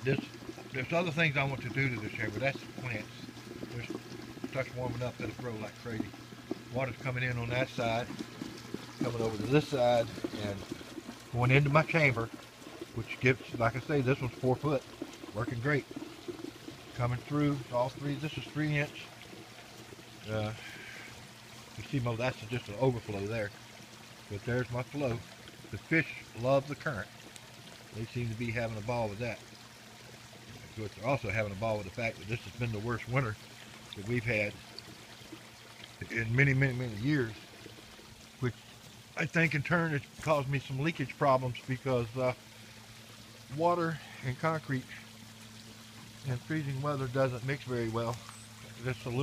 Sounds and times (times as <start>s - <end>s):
Speech: 0.0s - 6.1s, 6.7s - 8.2s, 9.0s - 10.7s, 11.3s - 12.3s, 13.0s - 15.9s, 16.9s - 19.1s, 20.2s - 20.8s, 21.8s - 23.6s, 24.3s - 27.1s, 28.0s - 29.4s, 30.7s - 33.4s, 34.0s - 34.6s, 36.0s - 37.4s, 39.2s - 42.4s, 43.5s - 45.1s, 46.2s - 48.2s, 48.8s - 49.2s
Water: 0.0s - 49.2s.